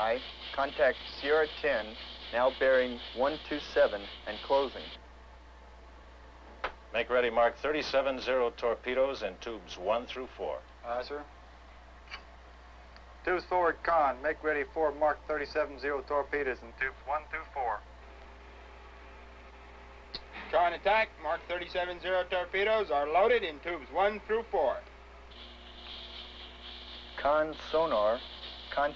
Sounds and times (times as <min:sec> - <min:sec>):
Speech: 0:00.0 - 0:05.0, 0:06.9 - 0:11.3, 0:13.2 - 0:17.8, 0:20.4 - 0:24.9, 0:27.2 - 0:28.9.